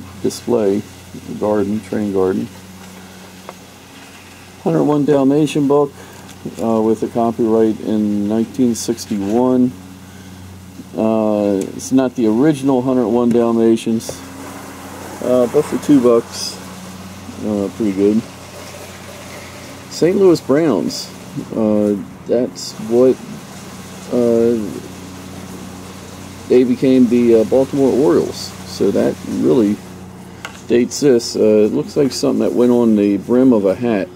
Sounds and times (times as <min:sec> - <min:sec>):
Speech: 0:00.0 - 0:02.5, 0:04.6 - 0:09.8, 0:10.9 - 0:14.2, 0:15.2 - 0:16.6, 0:17.3 - 0:18.3, 0:19.9 - 0:23.3, 0:24.1 - 0:24.9, 0:26.5 - 0:29.8, 0:30.7 - 0:34.1.